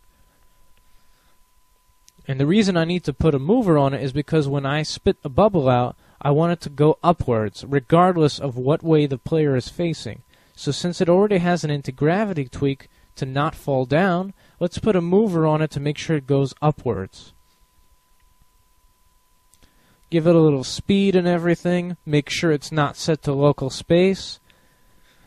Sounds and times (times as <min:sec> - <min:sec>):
Speech: 0:02.2 - 0:17.4, 0:20.1 - 0:24.4.